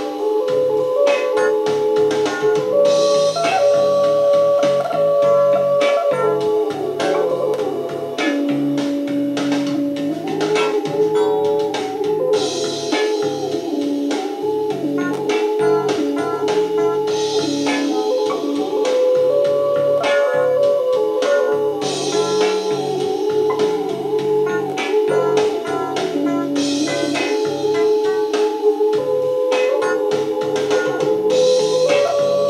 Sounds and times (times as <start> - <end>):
Theremin: 0.0 - 32.4.